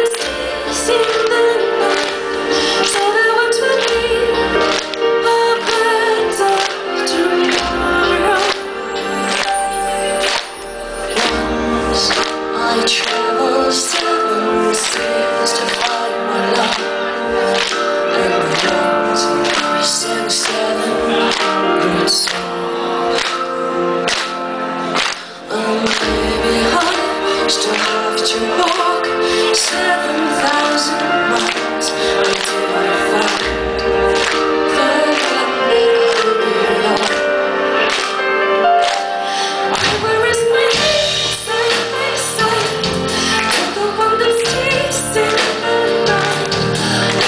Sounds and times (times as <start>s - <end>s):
Music: 0.0s - 47.2s.